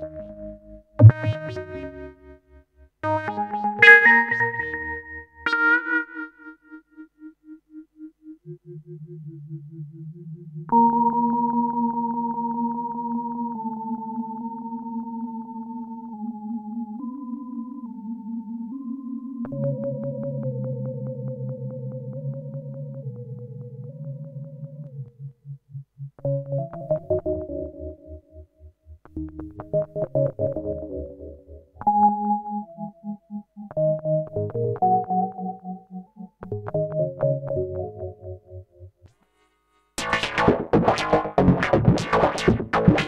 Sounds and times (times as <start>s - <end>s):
Music: 0.0s - 43.0s.